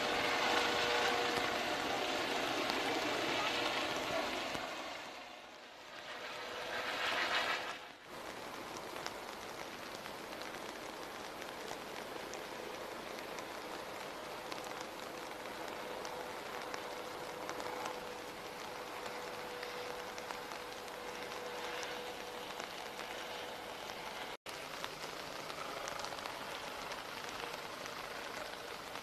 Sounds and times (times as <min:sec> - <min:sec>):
Rain on surface: 0:00.0 - 0:29.0.